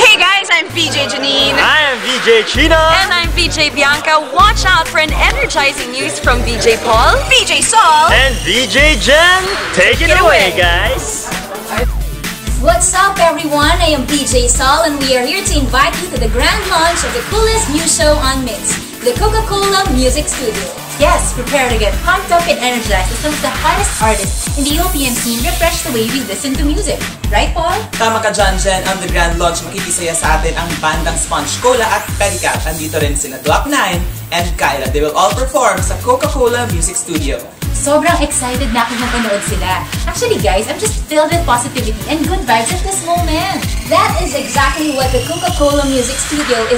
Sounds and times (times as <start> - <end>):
Background music: 0.0 - 46.7.